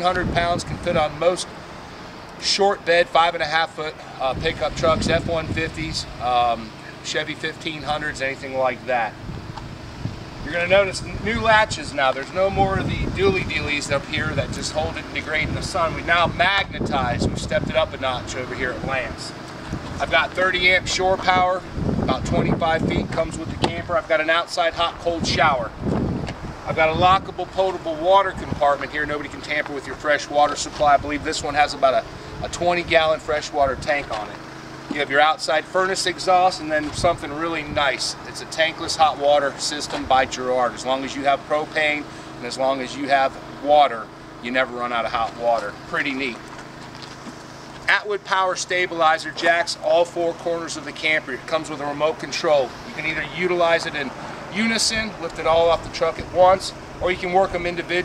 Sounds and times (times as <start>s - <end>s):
Speech: 0.0s - 1.5s, 2.4s - 9.2s, 10.5s - 19.4s, 20.0s - 25.8s, 26.7s - 46.4s, 47.9s - 58.0s.